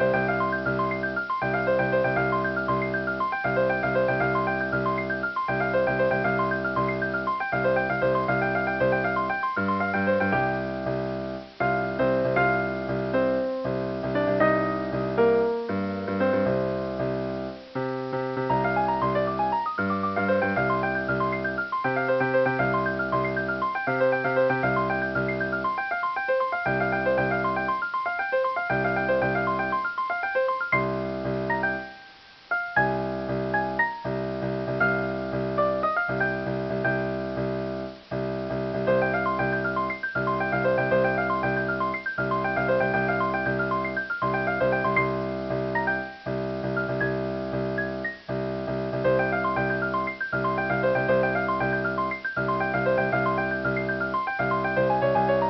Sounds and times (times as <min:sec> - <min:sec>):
Music: 0:00.0 - 0:55.4.